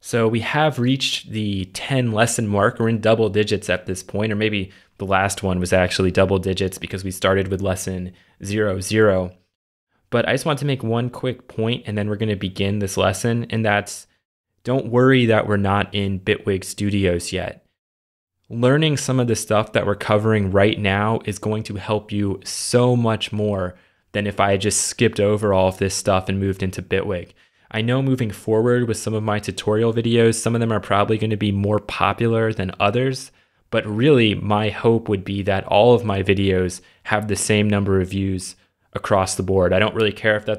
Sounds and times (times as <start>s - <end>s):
Speech: 0.0s - 9.5s, 10.1s - 17.7s, 18.5s - 40.5s.